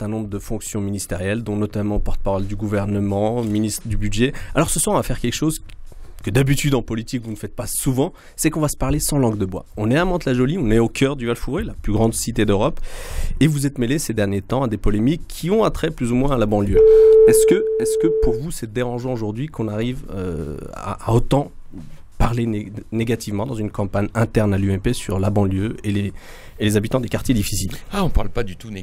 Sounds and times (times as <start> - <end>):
Speech: 0.0 - 12.8, 13.4 - 28.8.